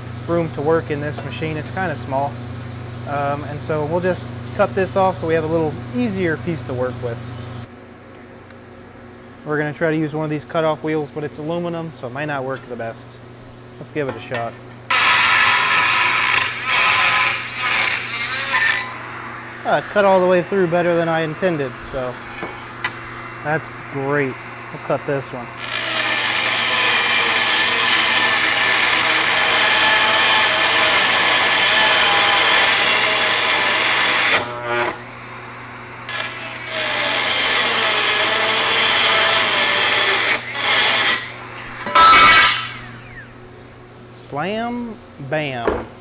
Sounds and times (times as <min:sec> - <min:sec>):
Speech: 0:00.3 - 0:02.4, 0:03.1 - 0:07.2, 0:09.4 - 0:13.2, 0:13.8 - 0:14.6, 0:19.6 - 0:22.2, 0:23.4 - 0:25.5, 0:44.1 - 0:45.8.